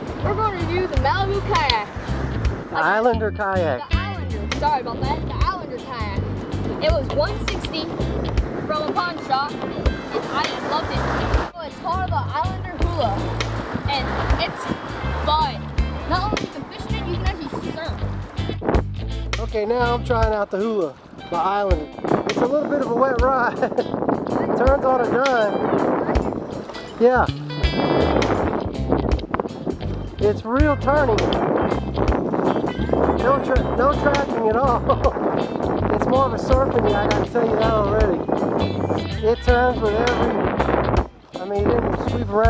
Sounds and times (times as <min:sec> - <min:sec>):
Music: 0:00.0 - 0:42.4
Rowboat, canoe, kayak: 0:00.0 - 0:42.4.